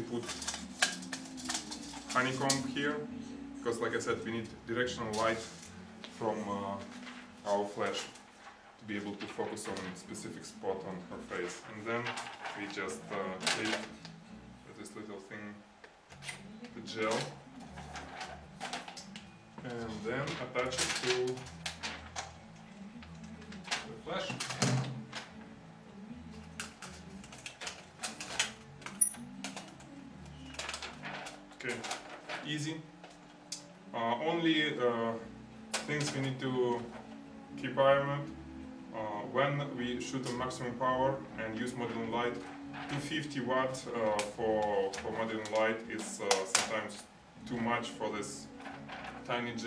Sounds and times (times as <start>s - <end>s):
Inside, small room: 0.0s - 49.6s
Music: 0.0s - 49.6s
Speech: 2.1s - 5.6s, 6.2s - 8.1s, 8.8s - 13.9s, 14.7s - 15.6s, 16.7s - 17.4s, 19.6s - 21.5s, 23.8s - 24.4s, 31.6s - 32.9s, 34.0s - 36.9s, 38.9s - 48.5s, 49.3s - 49.6s.